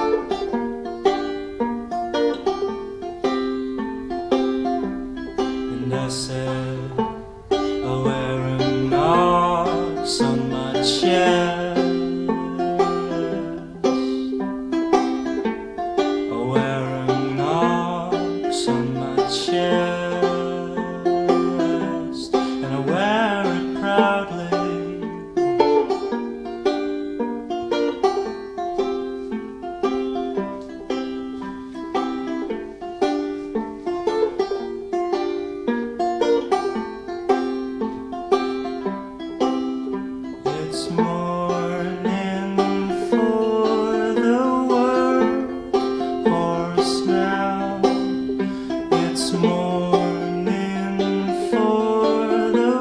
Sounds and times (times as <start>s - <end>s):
Banjo: 0.0s - 52.8s.